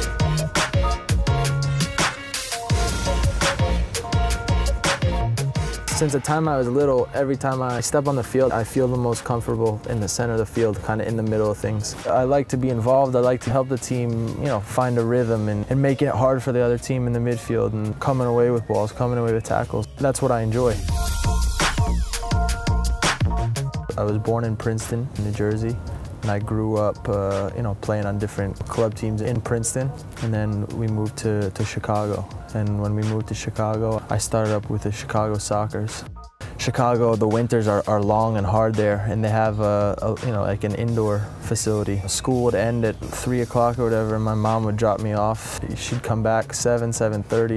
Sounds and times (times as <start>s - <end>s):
Music: 0.0s - 47.5s
Speech: 5.9s - 20.8s, 23.9s - 47.5s.